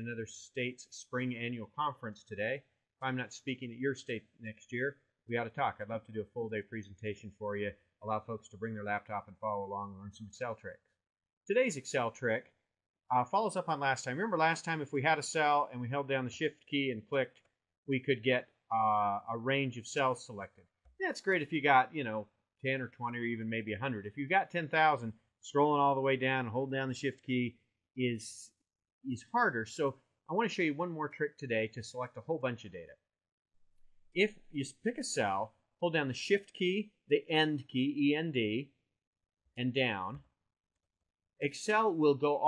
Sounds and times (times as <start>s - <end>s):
Speech: 0.0s - 10.9s, 11.5s - 33.0s, 34.2s - 38.8s, 39.6s - 40.4s, 41.4s - 42.4s.